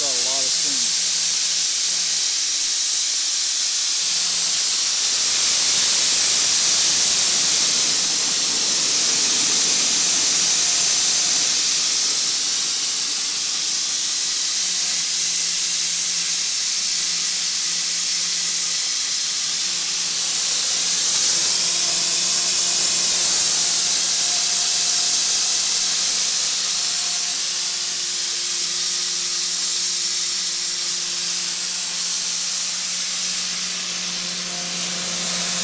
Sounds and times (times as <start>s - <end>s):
Hiss: 0.0s - 35.6s.